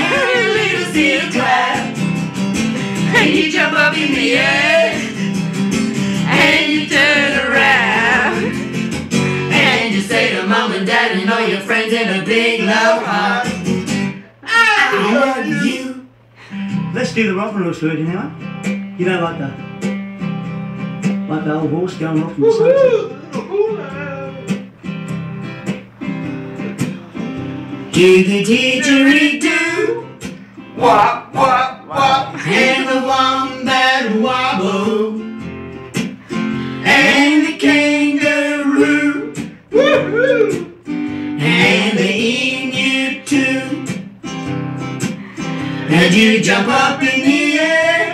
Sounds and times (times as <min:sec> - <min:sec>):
Music: 0:00.0 - 0:48.1
Speech: 0:17.0 - 0:18.4, 0:19.0 - 0:19.6, 0:21.3 - 0:22.6.